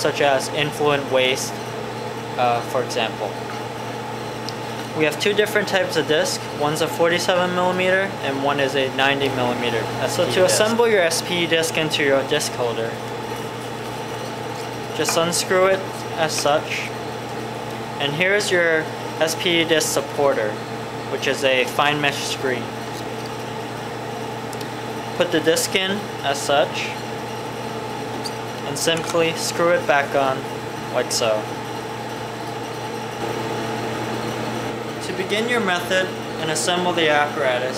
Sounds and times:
Speech: 0.0 - 1.6, 2.4 - 3.4, 5.0 - 13.0, 15.0 - 16.9, 18.0 - 22.7, 25.2 - 27.0, 28.6 - 31.5, 35.0 - 37.7
Microwave oven: 0.0 - 37.7.

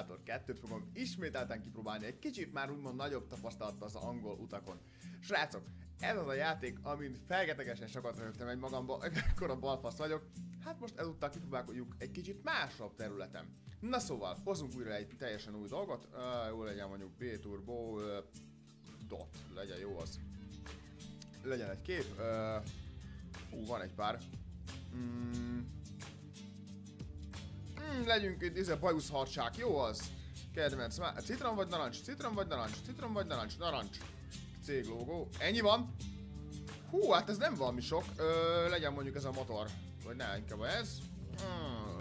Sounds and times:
Speech: 0.0 - 18.3, 19.0 - 20.2, 21.4 - 22.7, 23.5 - 24.3, 27.8 - 34.0, 34.6 - 35.9, 36.9 - 42.0
Music: 0.0 - 42.0.

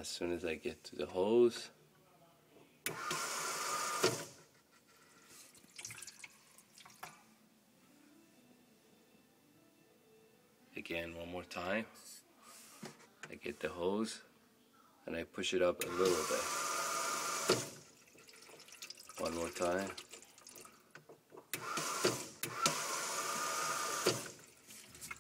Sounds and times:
Speech: 0.0 - 2.8, 10.8 - 12.0, 13.3 - 16.5, 19.2 - 20.0.

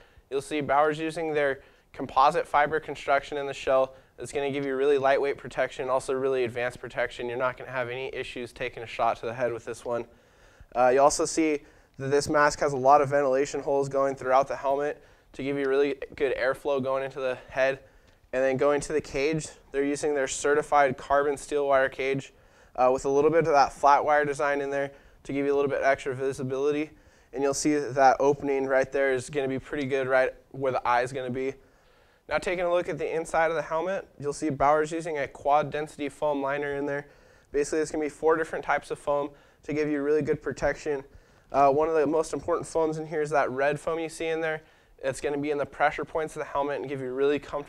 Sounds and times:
Speech: 0.0 - 31.6, 32.3 - 47.6.

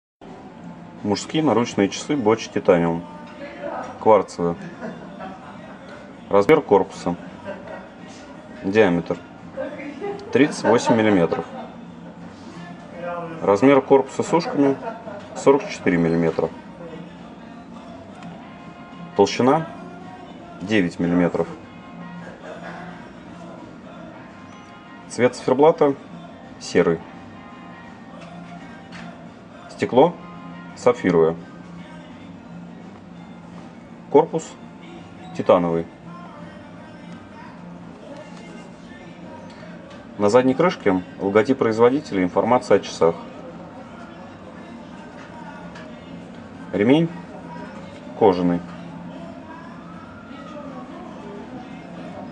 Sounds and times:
Speech: 1.0 - 4.7, 6.3 - 7.2, 8.6 - 11.6, 13.0 - 17.1, 19.2 - 19.7, 20.6 - 21.6, 25.1 - 26.0, 26.6 - 27.0, 29.7 - 30.2, 30.8 - 31.4, 35.4 - 35.9, 40.2 - 43.3, 46.7 - 47.2, 48.2 - 48.7.

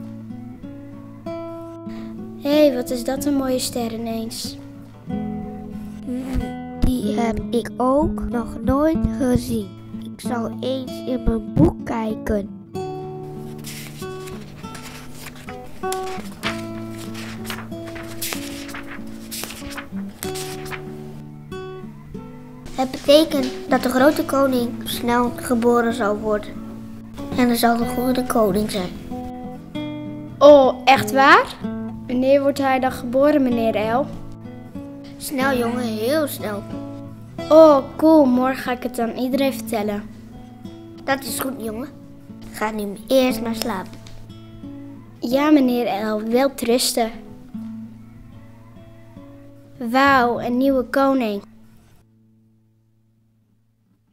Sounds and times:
Music: 0.0 - 54.1.

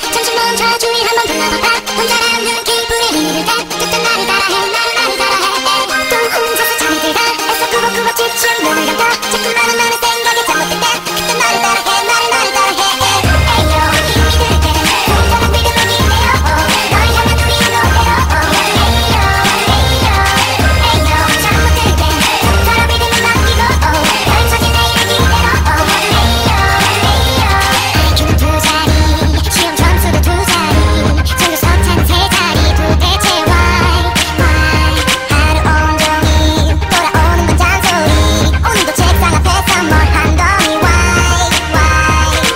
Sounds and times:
Music: 0.0 - 42.5.

